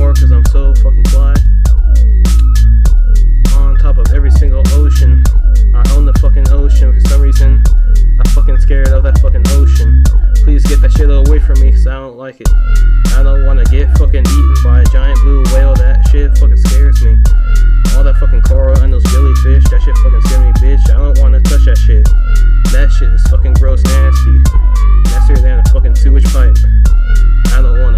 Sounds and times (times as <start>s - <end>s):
Music: 0.0s - 27.9s.